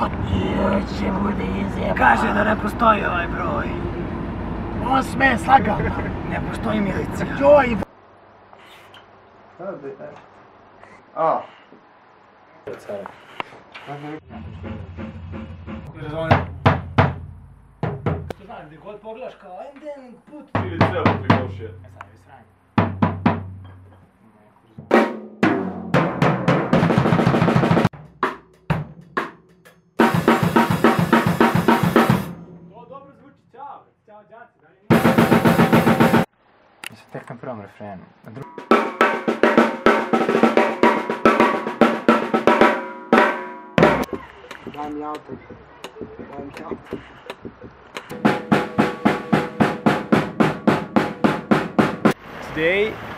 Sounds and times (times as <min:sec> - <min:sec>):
Drum kit: 0:14.4 - 0:18.4, 0:20.6 - 0:22.0, 0:22.8 - 0:23.8, 0:24.8 - 0:33.0, 0:34.9 - 0:36.3, 0:38.4 - 0:52.2
Bass drum: 0:14.5 - 0:18.4, 0:22.8 - 0:23.7, 0:34.9 - 0:36.3, 0:43.8 - 0:52.2
Speech: 0:18.4 - 0:22.5, 0:32.8 - 0:34.9, 0:52.5 - 0:53.0.